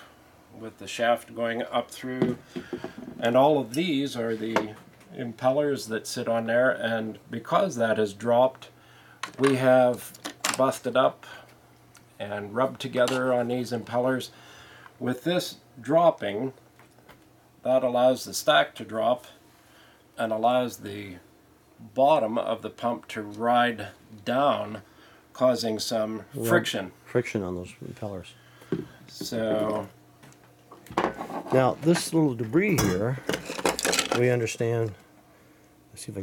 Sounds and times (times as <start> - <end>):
Speech: 0.6 - 2.4, 3.2 - 8.7, 9.4 - 11.2, 12.2 - 14.3, 15.0 - 16.6, 17.6 - 19.4, 20.2 - 21.2, 21.8 - 24.8, 25.4 - 28.4, 29.1 - 30.0, 31.5 - 33.3, 34.1 - 35.0, 35.9 - 36.2.